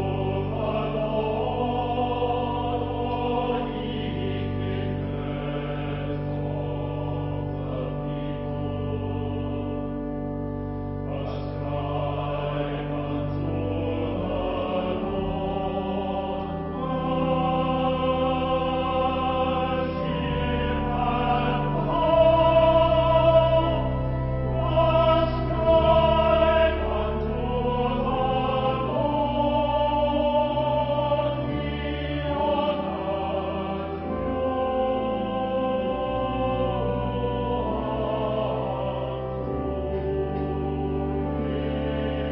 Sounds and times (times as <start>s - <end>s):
Choir: 0.0s - 42.3s.